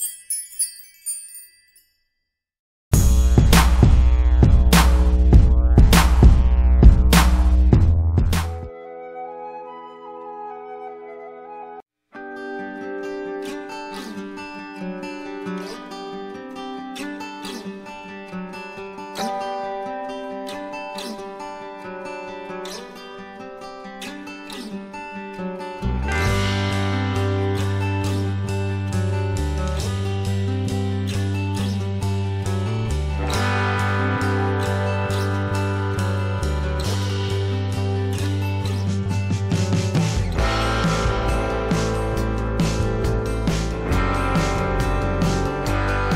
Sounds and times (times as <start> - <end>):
Music: 2.9 - 46.1.